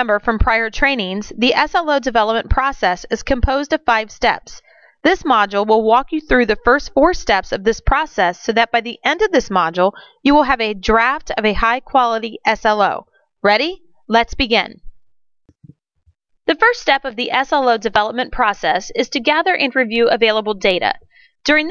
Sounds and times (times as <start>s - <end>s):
Speech: 0.0s - 14.8s, 16.5s - 21.7s.